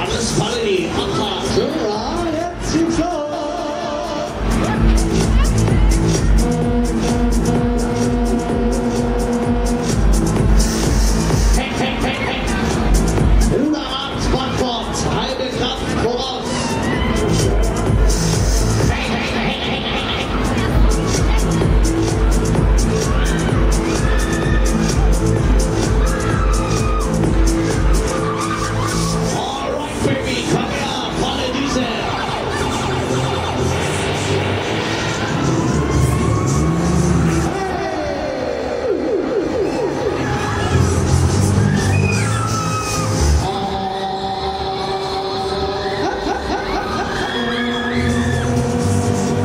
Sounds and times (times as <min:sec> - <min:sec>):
Hubbub, speech noise, speech babble: 0:00.0 - 0:49.4
Music: 0:00.0 - 0:49.4.